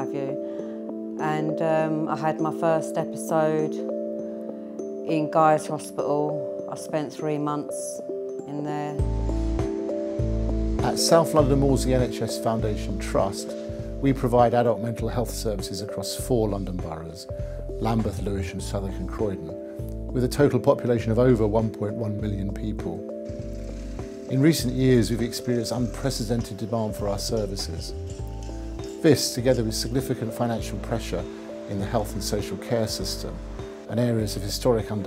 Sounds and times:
Music: 0:00.0 - 0:35.0
Speech: 0:01.2 - 0:03.8, 0:05.1 - 0:09.0, 0:10.8 - 0:19.5, 0:20.1 - 0:23.0, 0:24.3 - 0:28.0, 0:29.0 - 0:35.0.

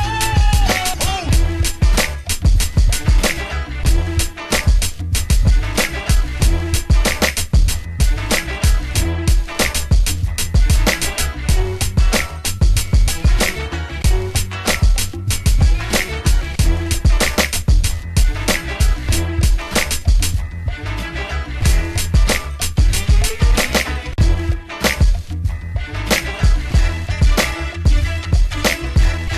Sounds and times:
Funk: 0:00.0 - 0:29.3.

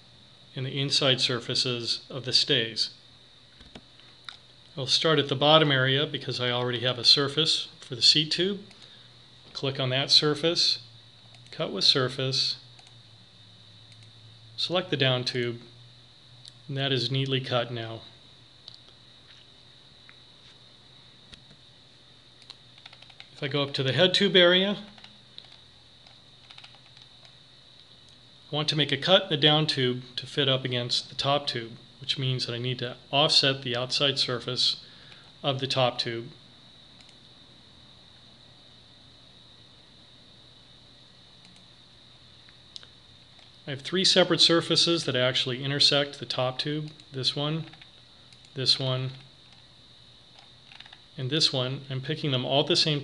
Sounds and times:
Speech: 0:00.5 - 0:03.0, 0:04.8 - 0:08.7, 0:09.5 - 0:10.9, 0:11.5 - 0:12.7, 0:14.6 - 0:15.8, 0:16.7 - 0:18.2, 0:23.3 - 0:25.0, 0:28.5 - 0:34.8, 0:35.4 - 0:36.4, 0:43.7 - 0:47.8, 0:48.6 - 0:49.3, 0:51.2 - 0:53.0.

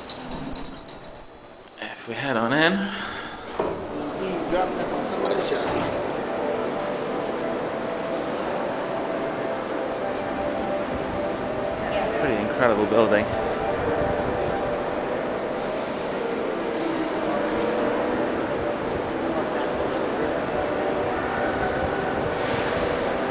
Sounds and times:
Music: 0:04.2 - 0:23.3.

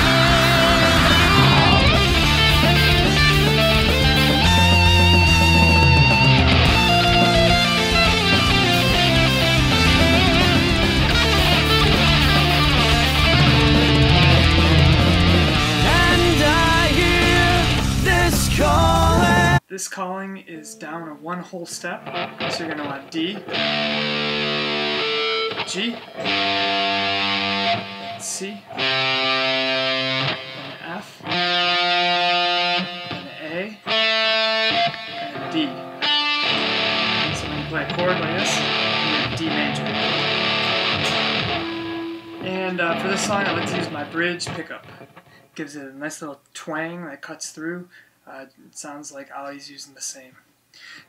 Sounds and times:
Electric guitar: 0:00.0 - 0:19.6, 0:22.0 - 0:45.6.

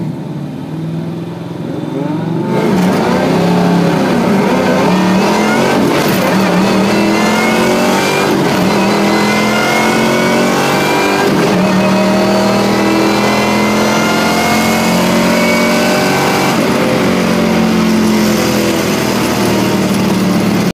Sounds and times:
Car: 0:00.0 - 0:20.7.

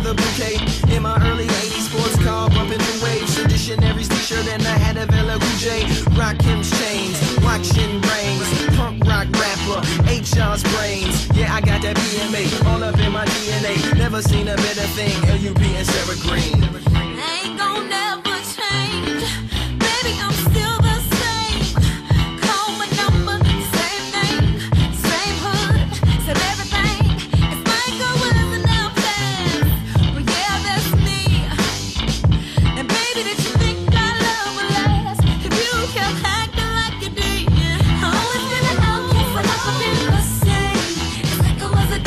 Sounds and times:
Dance music: 0:00.0 - 0:17.7, 0:19.8 - 0:42.0
Funk: 0:00.0 - 0:17.7, 0:18.4 - 0:42.0
Happy music: 0:00.0 - 0:42.0.

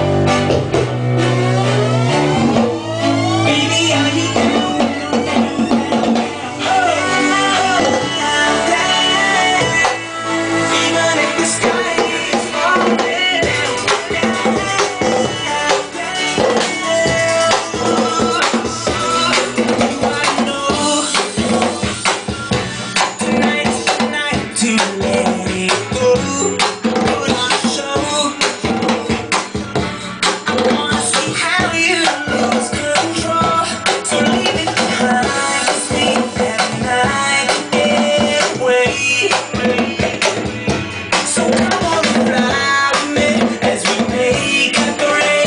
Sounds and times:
Drum: 0:00.0 - 0:10.1, 0:10.7 - 0:45.4
Drum kit: 0:00.0 - 0:45.4.

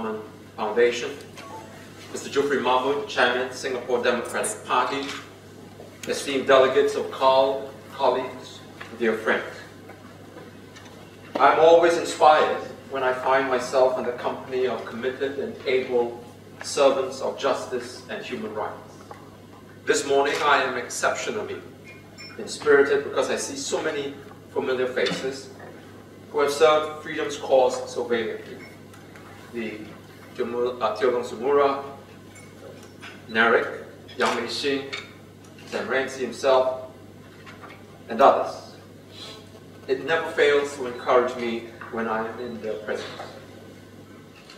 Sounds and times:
Male speech, man speaking: 0:00.0 - 0:01.3, 0:02.1 - 0:05.3, 0:06.1 - 0:09.7, 0:11.4 - 0:19.0, 0:19.9 - 0:21.7, 0:22.4 - 0:25.5, 0:26.3 - 0:28.6, 0:29.5 - 0:32.0, 0:33.3 - 0:35.0, 0:35.7 - 0:36.9, 0:38.1 - 0:38.8, 0:39.9 - 0:43.5.

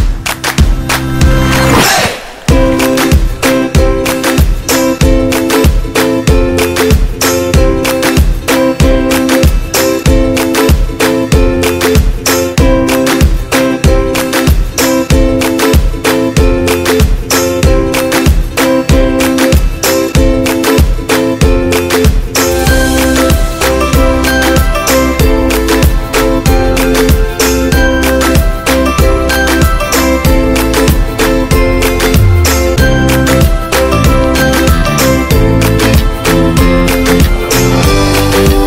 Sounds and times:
Music: 0:00.0 - 0:38.6.

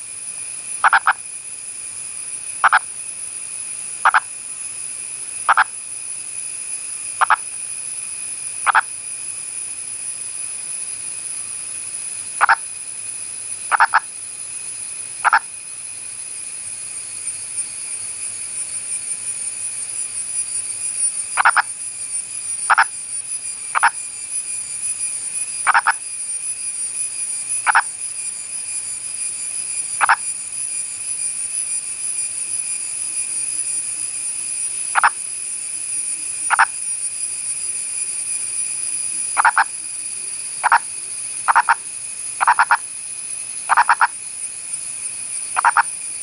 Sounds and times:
Frog: 0:00.8 - 0:01.2, 0:02.6 - 0:03.0, 0:04.0 - 0:04.4, 0:05.4 - 0:05.8, 0:07.2 - 0:07.6, 0:08.6 - 0:09.0, 0:12.4 - 0:12.7, 0:13.6 - 0:14.2, 0:15.2 - 0:15.6, 0:21.4 - 0:21.8, 0:22.6 - 0:23.0, 0:23.7 - 0:24.0, 0:25.6 - 0:26.1, 0:27.6 - 0:28.0, 0:30.0 - 0:30.3, 0:34.8 - 0:35.2, 0:36.3 - 0:36.8, 0:39.3 - 0:42.9, 0:43.6 - 0:44.2, 0:45.5 - 0:46.2.

